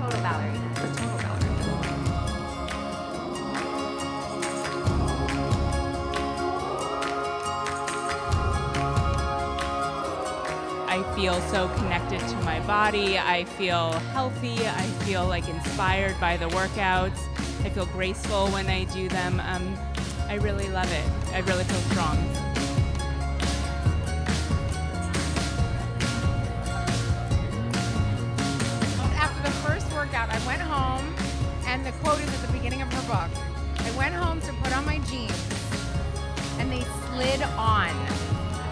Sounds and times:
Speech: 0:00.0 - 0:01.6, 0:10.9 - 0:17.1, 0:36.6 - 0:38.0
Music: 0:00.0 - 0:38.7.

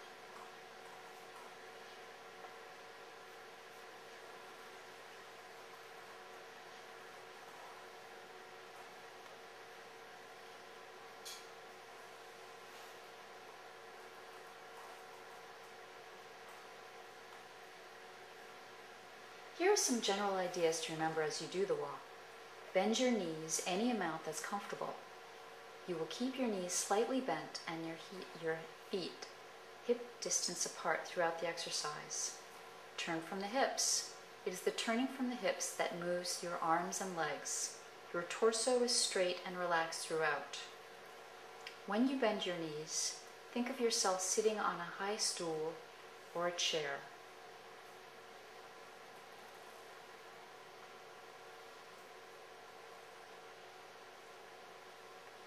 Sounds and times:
Speech: 0:19.6 - 0:22.1, 0:22.7 - 0:25.0, 0:25.9 - 0:32.4, 0:33.0 - 0:40.8, 0:41.7 - 0:47.2.

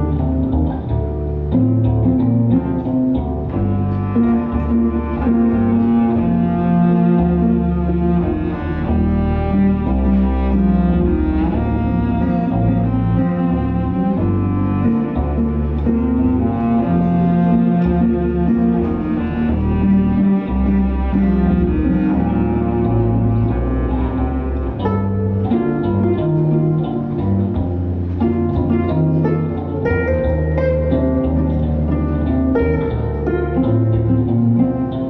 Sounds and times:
Cello: 0:00.0 - 0:35.0.

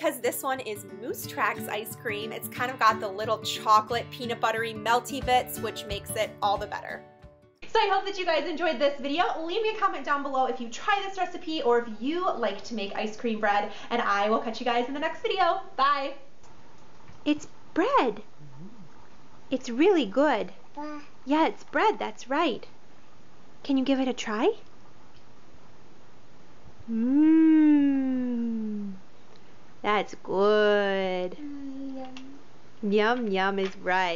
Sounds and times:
Inside, small room: 0:00.0 - 0:34.1.

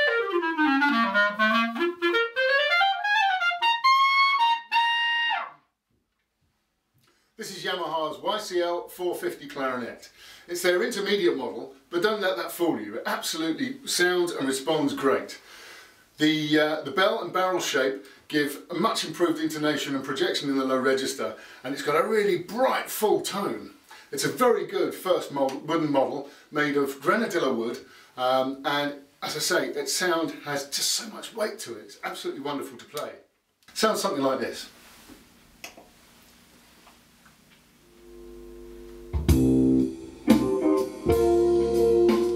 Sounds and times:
Speech: 0:07.4 - 0:15.4, 0:16.2 - 0:34.8.

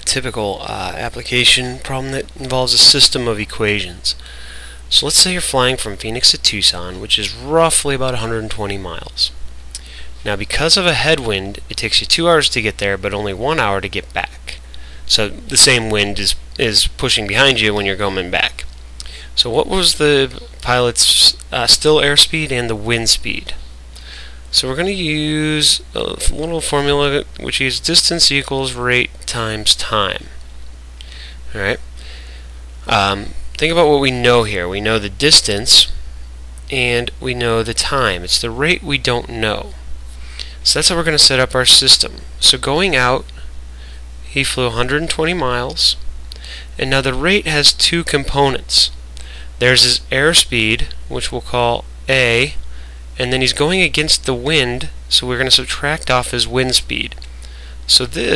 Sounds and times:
Speech: 0:00.0 - 0:04.2, 0:04.9 - 0:09.4, 0:10.2 - 0:18.7, 0:19.4 - 0:23.6, 0:24.5 - 0:30.4, 0:31.5 - 0:31.8, 0:32.8 - 0:36.0, 0:36.7 - 0:39.8, 0:40.6 - 0:43.3, 0:44.3 - 0:46.0, 0:46.8 - 0:49.0, 0:49.6 - 0:52.6, 0:53.2 - 0:57.2, 0:57.9 - 0:58.3.

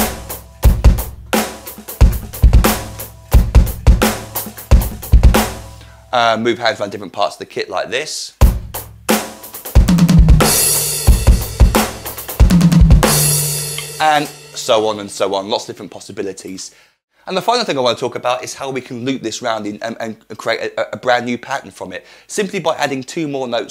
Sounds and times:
Snare drum: 0:00.0 - 0:05.7, 0:08.4 - 0:14.8
Bass drum: 0:00.0 - 0:05.8, 0:08.4 - 0:14.7
Drum kit: 0:00.0 - 0:06.4, 0:08.4 - 0:15.3
Speech: 0:06.1 - 0:08.4, 0:14.0 - 0:23.7.

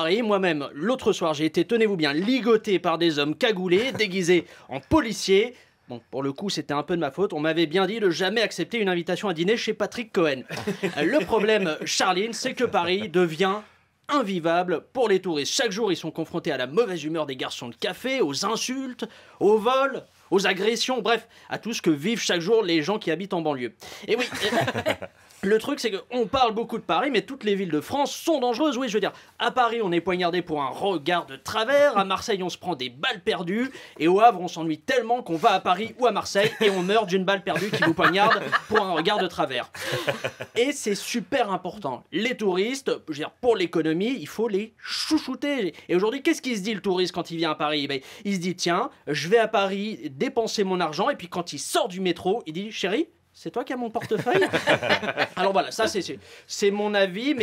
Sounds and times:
Speech: 0:00.0 - 0:24.8, 0:25.4 - 0:57.4.

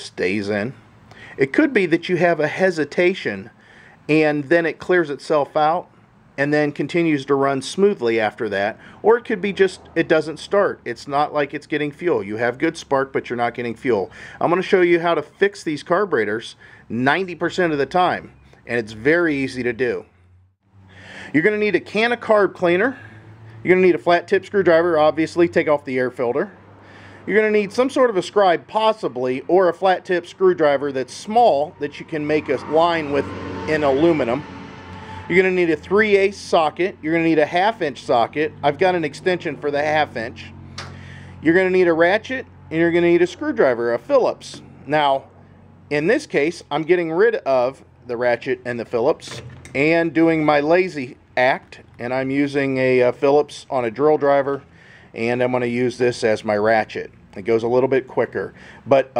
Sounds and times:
Speech: 0:00.0 - 0:00.8, 0:01.4 - 0:03.5, 0:04.1 - 0:20.1, 0:21.3 - 0:26.6, 0:27.3 - 0:34.4, 0:35.3 - 0:40.5, 0:41.4 - 0:45.3, 0:45.9 - 0:59.1.

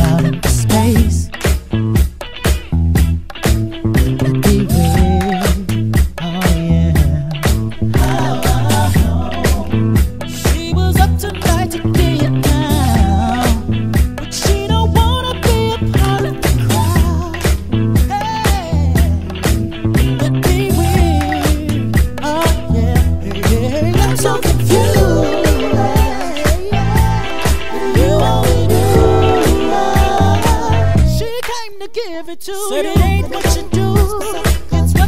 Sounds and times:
Funk: 0:00.0 - 0:31.6, 0:32.7 - 0:35.0.

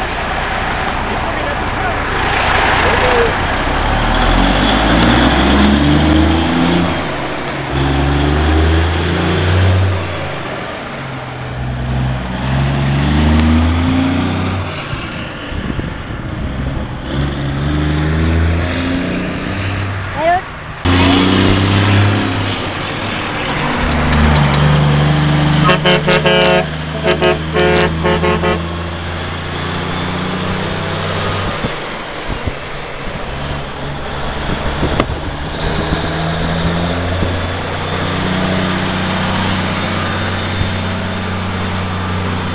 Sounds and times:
Truck: 0:00.0 - 0:42.5.

